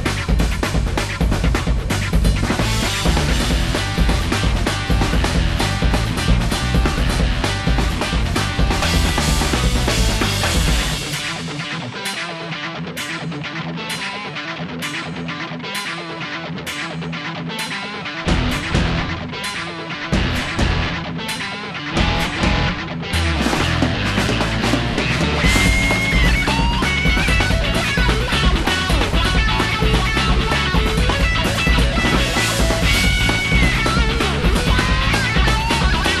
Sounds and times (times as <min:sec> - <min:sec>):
Music: 0:00.0 - 0:36.2.